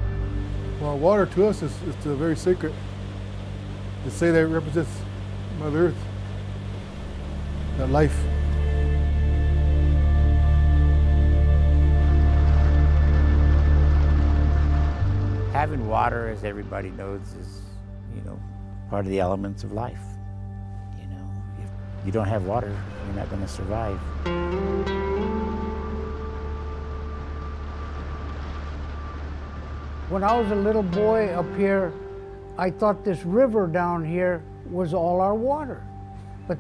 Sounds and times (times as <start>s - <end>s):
Music: 0.0s - 36.6s
Speech: 0.8s - 2.8s, 4.1s - 5.0s, 5.6s - 6.0s, 7.8s - 8.3s, 15.6s - 20.2s, 21.0s - 21.4s, 22.1s - 24.0s, 30.1s - 32.0s, 32.6s - 35.8s.